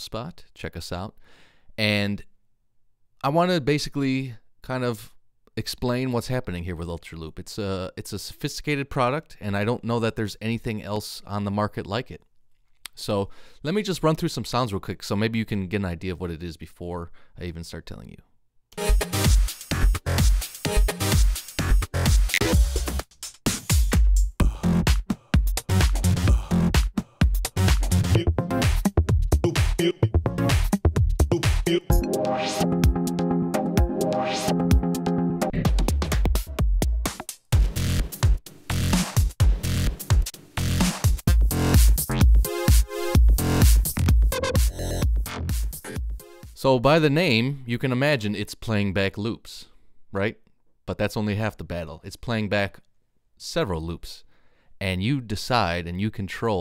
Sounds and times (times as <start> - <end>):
Speech: 0.0 - 1.2, 1.8 - 2.3, 3.2 - 12.3, 12.9 - 18.3, 46.6 - 56.6.